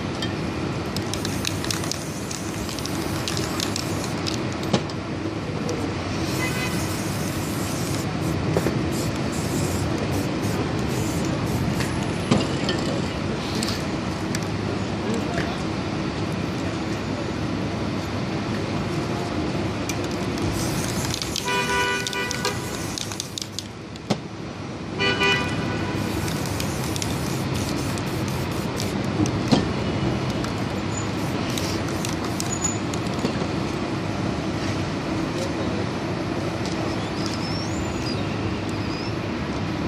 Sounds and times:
Spray: 1.0 - 4.4, 6.1 - 12.1, 20.4 - 23.7, 25.9 - 29.1, 30.9 - 32.8.

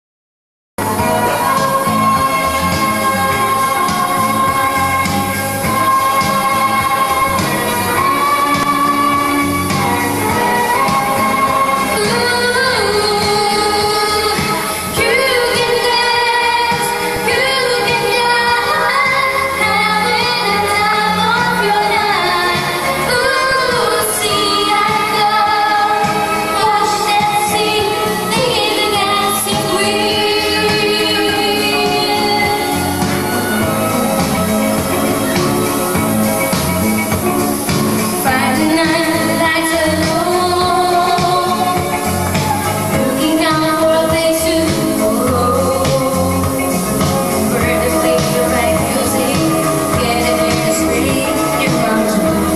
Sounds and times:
Music: 0.8 - 52.5
Female singing: 1.0 - 33.5, 38.2 - 52.5.

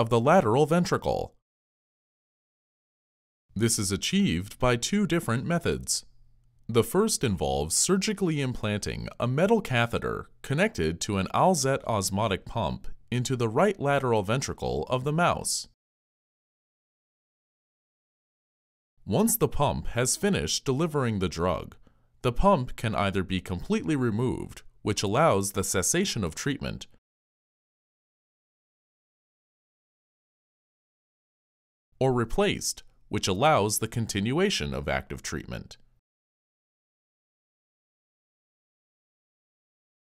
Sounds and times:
Speech: 0.0 - 1.4, 3.6 - 6.1, 6.7 - 15.8, 19.0 - 27.0, 32.0 - 35.9.

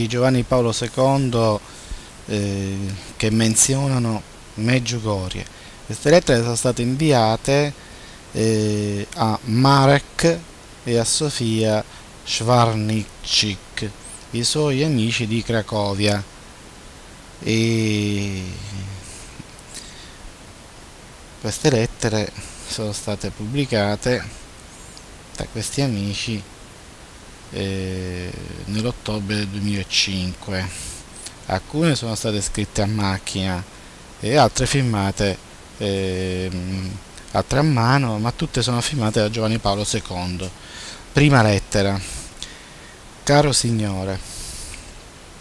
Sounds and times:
Speech: 0.0 - 1.6, 2.3 - 16.3, 17.4 - 19.1, 21.4 - 24.4, 25.4 - 26.5, 27.5 - 30.9, 31.5 - 40.6, 41.2 - 42.1, 43.2 - 44.2.

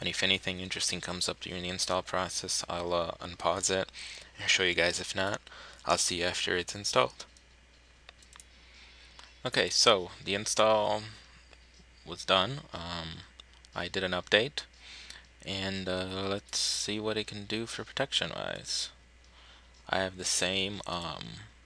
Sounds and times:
Speech: 0.0 - 7.3, 9.4 - 11.2, 12.1 - 14.7, 15.4 - 19.0, 19.9 - 21.6.

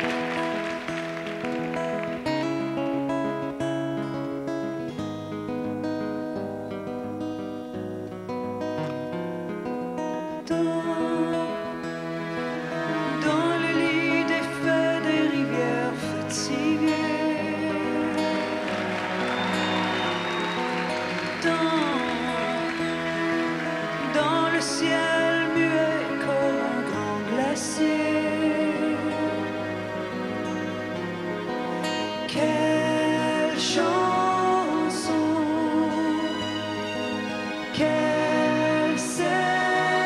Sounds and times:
Music: 0.0 - 40.0.

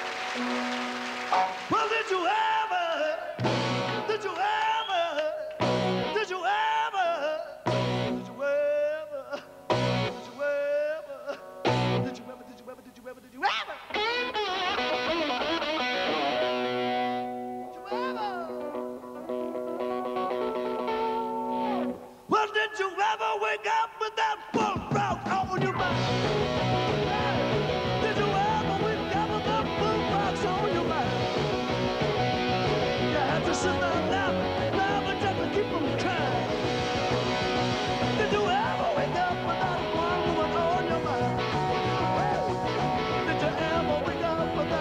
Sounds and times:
Blues: 0.0 - 22.9, 24.4 - 44.8.

